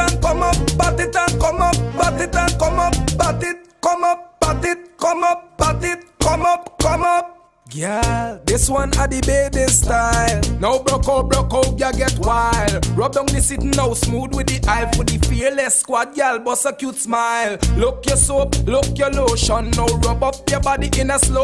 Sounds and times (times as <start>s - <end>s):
Music of Africa: 0.0s - 7.2s, 8.0s - 15.4s, 17.6s - 21.4s.